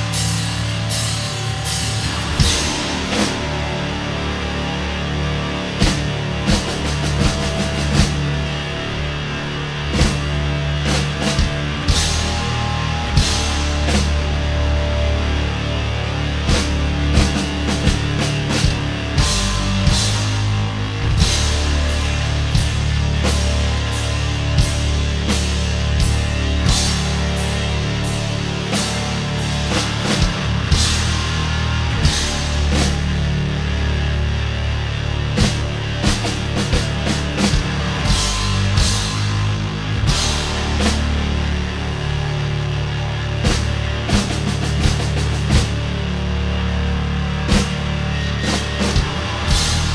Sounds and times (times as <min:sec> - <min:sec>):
Punk rock: 0:00.0 - 0:49.9.